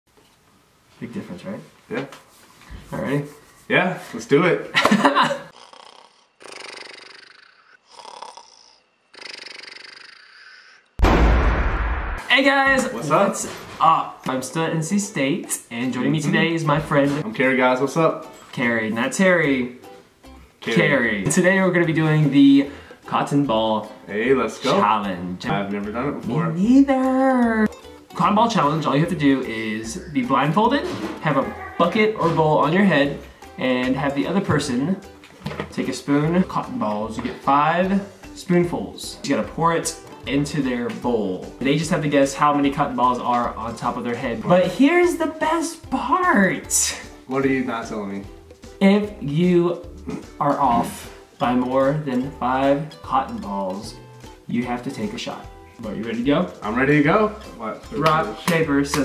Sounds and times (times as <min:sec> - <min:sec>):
Inside, small room: 0:00.1 - 0:59.0
Speech: 0:01.0 - 0:02.1, 0:12.2 - 0:19.7, 0:20.6 - 0:27.6, 0:28.2 - 0:35.1, 0:35.7 - 0:48.2, 0:48.8 - 0:59.0.